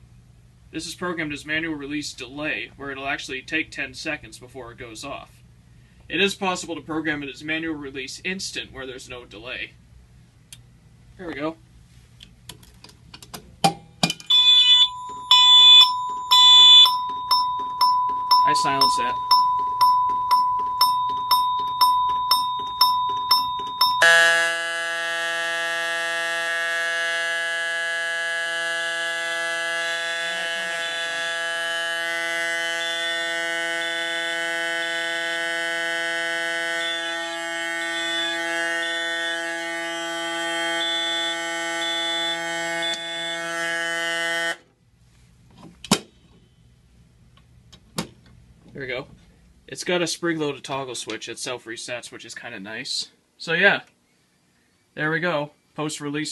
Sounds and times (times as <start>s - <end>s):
Fire alarm: 14.3s - 44.6s.